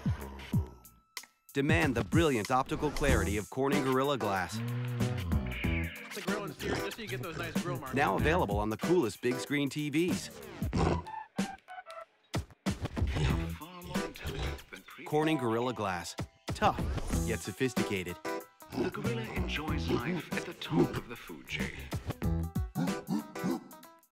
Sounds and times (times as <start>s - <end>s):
Music: 0.0s - 24.1s
Speech: 1.6s - 4.6s, 6.1s - 10.4s, 13.1s - 18.2s, 18.8s - 22.0s.